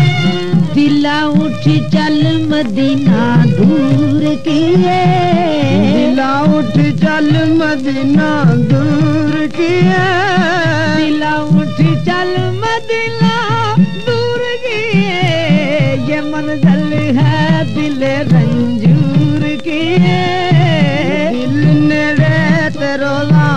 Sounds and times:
Music: 0.0s - 23.5s.

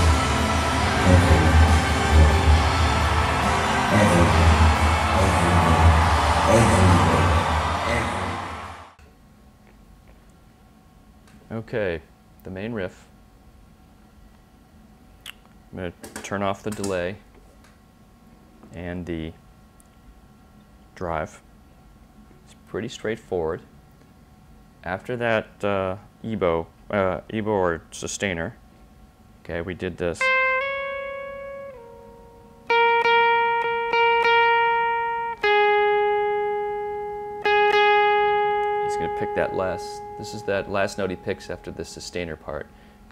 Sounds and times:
Speech: 1.1s - 1.6s, 3.9s - 4.6s, 5.2s - 8.4s, 11.5s - 13.1s, 15.7s - 17.3s, 18.7s - 19.4s, 21.0s - 21.4s, 22.5s - 23.7s, 24.8s - 28.6s, 29.4s - 30.3s, 38.9s - 42.7s.

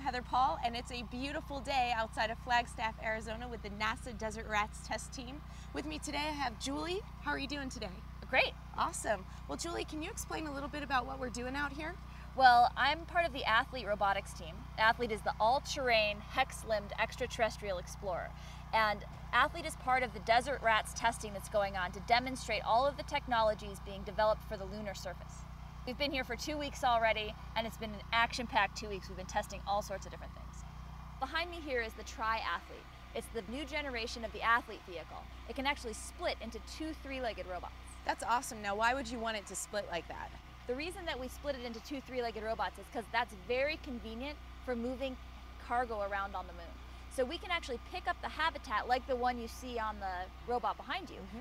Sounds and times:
Speech: 0.0s - 30.6s, 31.2s - 51.4s.

